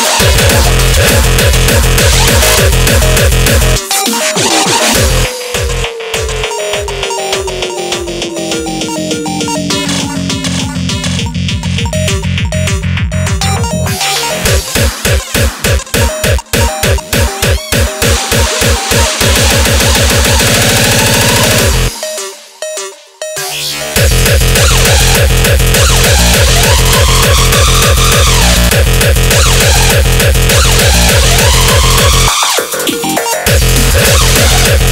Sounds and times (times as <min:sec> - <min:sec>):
Cacophony: 0:00.0 - 0:34.9.